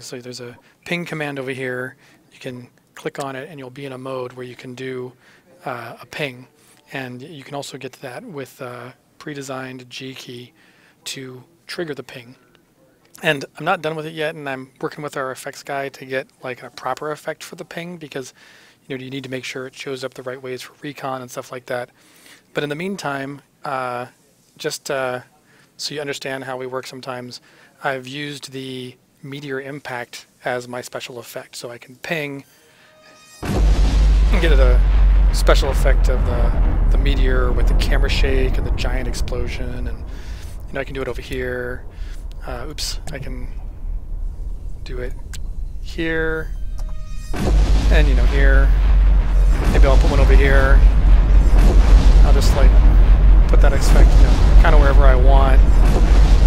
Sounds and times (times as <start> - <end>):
Speech: 0.0 - 21.9, 22.5 - 32.5, 34.3 - 43.6, 44.8 - 45.3, 45.9 - 46.5, 47.9 - 48.8, 49.6 - 50.9, 52.2 - 52.8, 53.5 - 55.7.